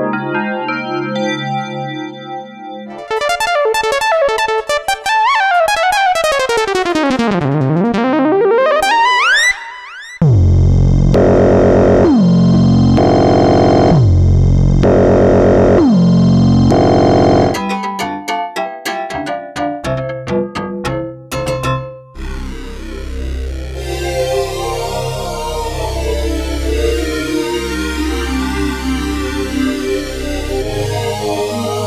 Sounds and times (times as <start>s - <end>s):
Synthesizer: 0.0s - 17.7s, 22.2s - 31.8s.